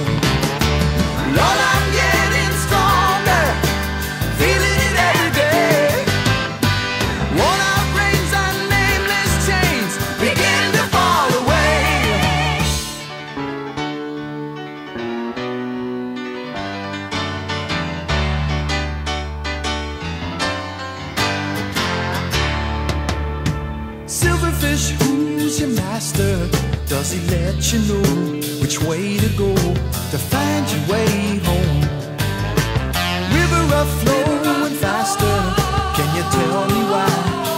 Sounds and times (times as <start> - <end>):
Music: 0.0 - 37.5.